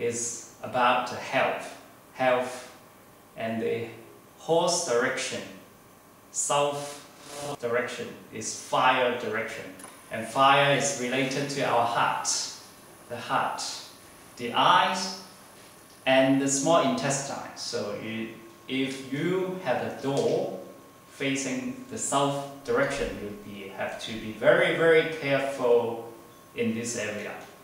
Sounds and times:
Speech: 0.0s - 2.8s, 3.4s - 5.6s, 6.4s - 15.3s, 16.0s - 27.6s
Inside, small room: 0.0s - 27.6s.

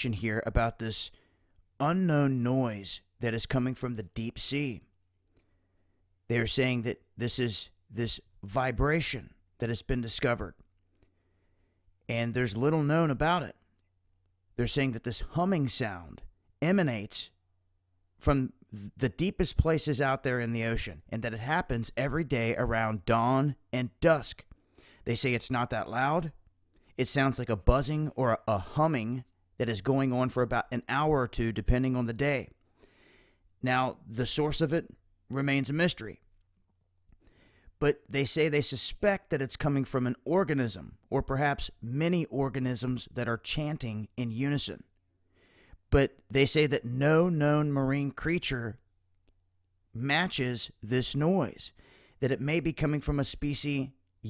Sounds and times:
Speech: 0.0s - 1.2s, 1.8s - 4.9s, 6.3s - 10.6s, 12.1s - 13.6s, 14.6s - 17.4s, 18.2s - 26.4s, 27.0s - 32.6s, 33.6s - 36.2s, 37.8s - 44.9s, 45.9s - 48.8s, 50.0s - 54.2s.

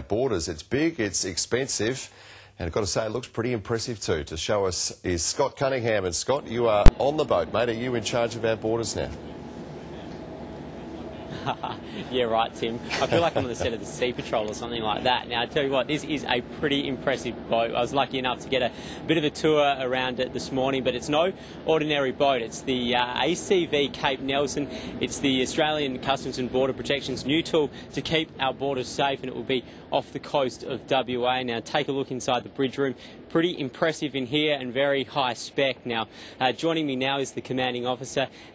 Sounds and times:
Speech: 0.0s - 9.2s, 12.1s - 38.3s.

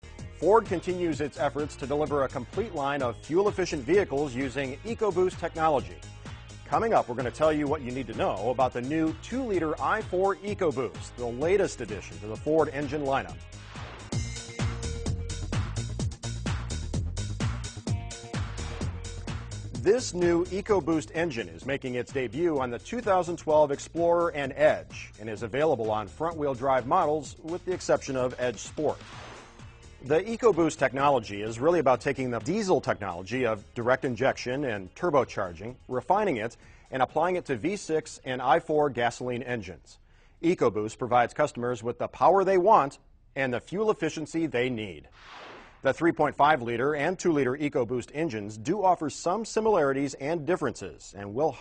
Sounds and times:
Music: 0.0s - 41.6s, 45.2s - 51.6s
Speech: 0.4s - 6.0s, 6.7s - 13.4s, 19.8s - 29.0s, 30.0s - 45.1s, 45.8s - 51.6s.

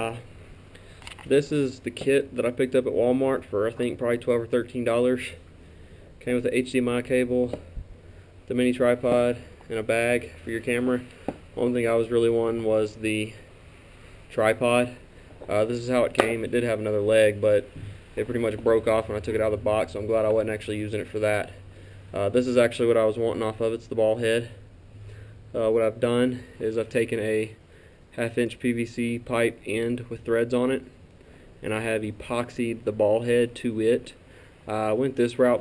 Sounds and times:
Speech: 0.0s - 0.3s, 1.3s - 5.4s, 6.2s - 7.6s, 8.5s - 13.4s, 14.3s - 21.6s, 22.2s - 24.6s, 25.5s - 27.6s, 28.2s - 30.9s, 31.6s - 35.6s.

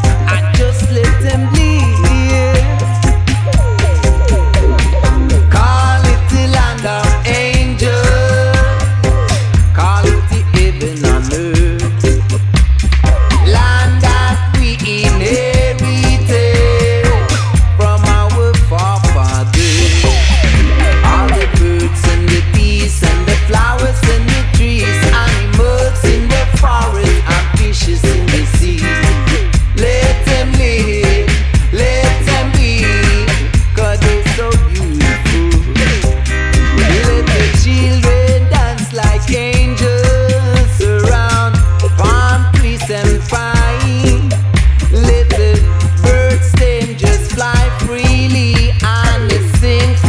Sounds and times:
Music: 0.0s - 50.0s.

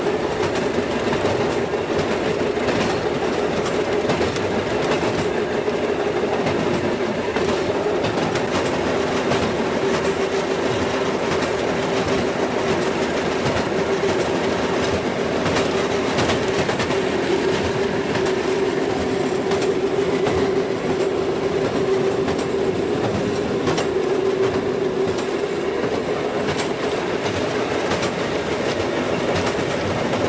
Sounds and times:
Railroad car, train wagon: 0.0s - 30.2s
Train: 0.0s - 30.2s.

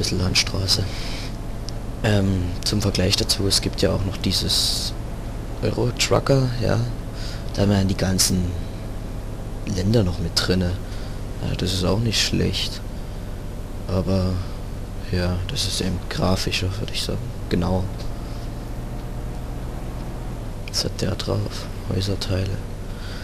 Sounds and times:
Speech: 0.0s - 1.2s, 2.0s - 5.0s, 5.6s - 8.7s, 9.7s - 12.9s, 13.9s - 18.1s, 20.7s - 22.7s
Vehicle: 0.0s - 23.2s.

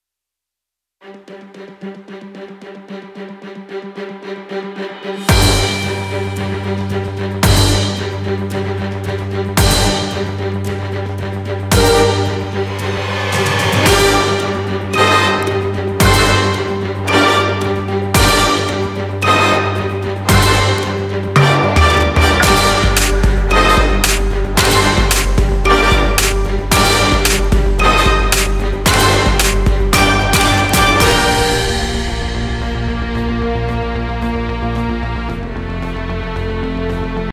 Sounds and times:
Music: 1.0s - 37.3s.

